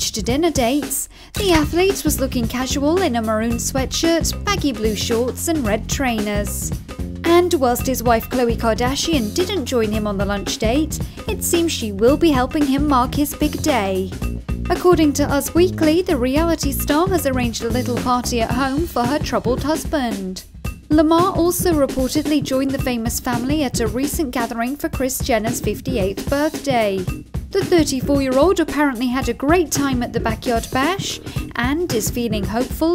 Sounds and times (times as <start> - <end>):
Speech: 0.0 - 6.7, 7.3 - 14.1, 14.7 - 32.9
Music: 0.0 - 32.9.